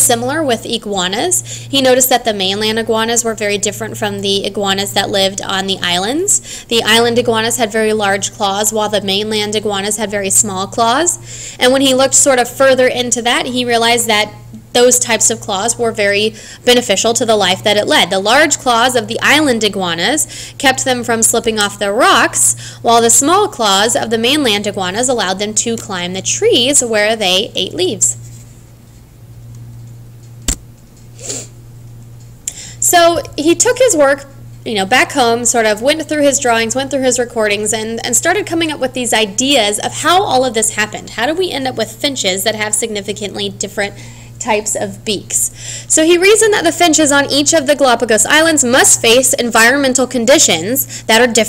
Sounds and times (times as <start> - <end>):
Speech: 0.0 - 28.2, 32.8 - 51.4.